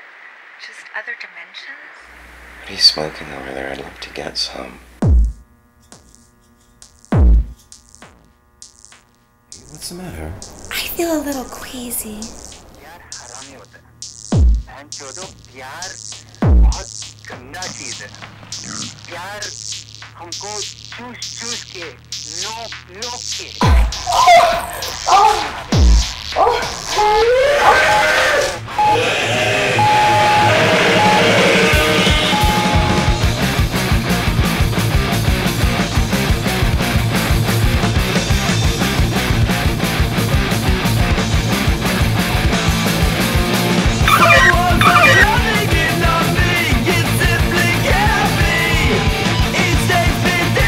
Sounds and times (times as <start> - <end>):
Music: 5.0 - 27.6, 28.3 - 50.6.